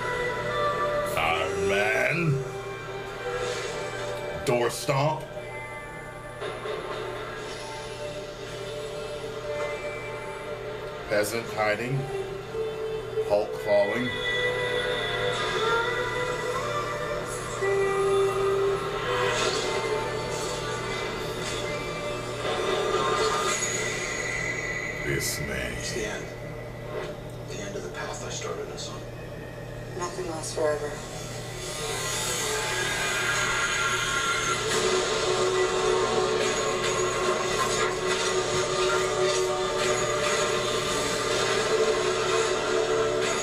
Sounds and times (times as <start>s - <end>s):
Television: 0.0s - 43.4s.